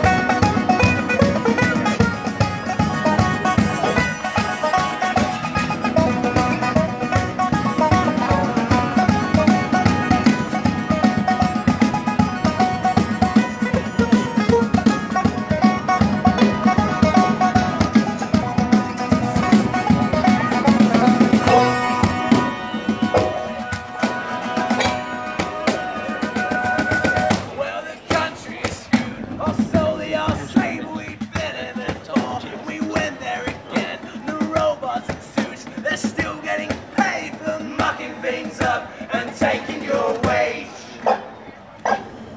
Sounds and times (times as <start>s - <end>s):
Bluegrass: 0.0s - 42.3s.